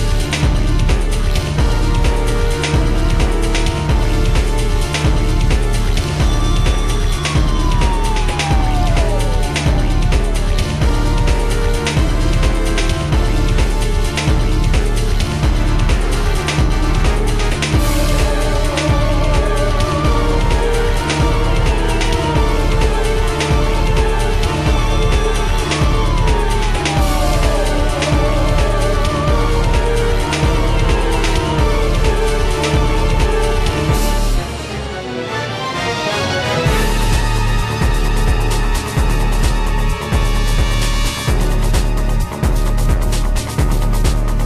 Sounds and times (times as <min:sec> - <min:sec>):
Background music: 0:00.0 - 0:44.4
Video game music: 0:00.0 - 0:44.4.